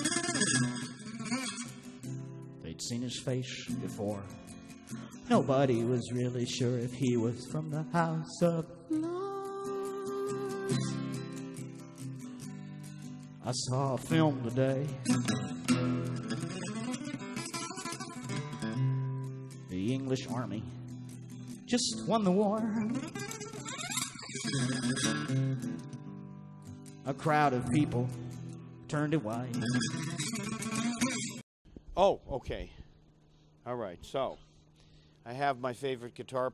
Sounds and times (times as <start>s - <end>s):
Electric guitar: 0.0s - 31.4s
Strum: 0.0s - 31.4s
Speech: 2.6s - 4.3s, 5.3s - 7.5s, 19.7s - 20.7s, 27.1s - 28.1s, 28.9s - 29.7s, 32.0s - 32.8s, 33.7s - 34.4s, 35.3s - 36.5s.